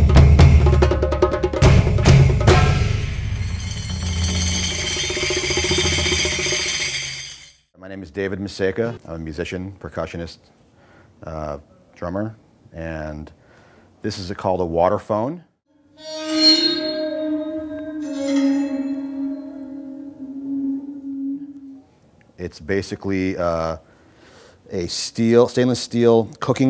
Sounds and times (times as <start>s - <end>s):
Speech: 7.8s - 10.5s, 11.2s - 13.4s, 14.0s - 15.5s, 22.4s - 23.8s, 24.7s - 26.7s.